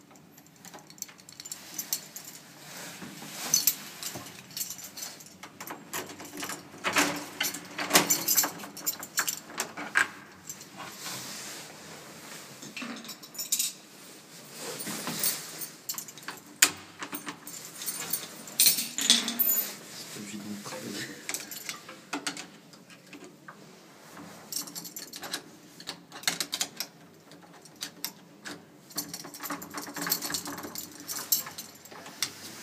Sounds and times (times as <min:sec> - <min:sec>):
Keys jangling: 0:03.6 - 0:09.5, 0:17.1 - 0:19.6
Speech: 0:20.1 - 0:21.3.